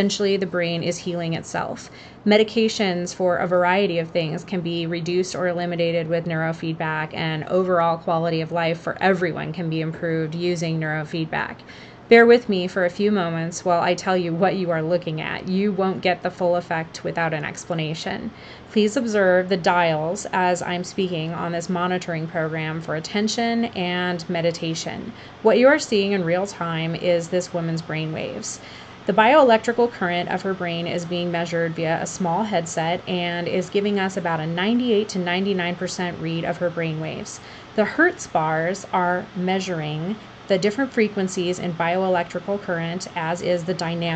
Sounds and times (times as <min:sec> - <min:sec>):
Speech: 0:00.0 - 0:44.1.